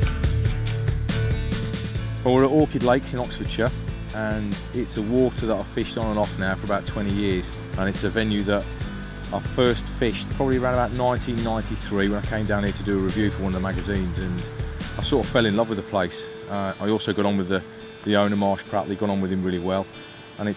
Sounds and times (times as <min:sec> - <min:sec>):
Music: 0:00.0 - 0:20.5
Speech: 0:02.2 - 0:08.7, 0:09.3 - 0:14.4, 0:15.0 - 0:20.5.